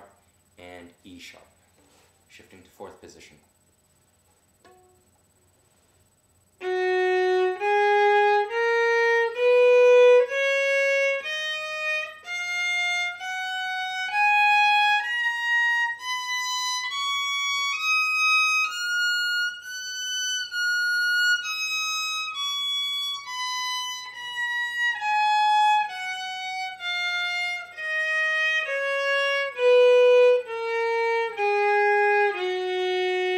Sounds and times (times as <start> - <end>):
Violin, fiddle: 6.6 - 33.3.